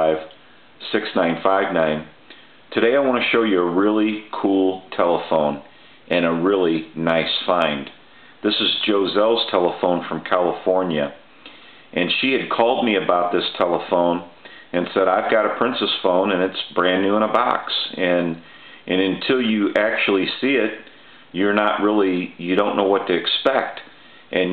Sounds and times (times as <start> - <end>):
Speech: 0.0 - 11.3, 11.9 - 24.5.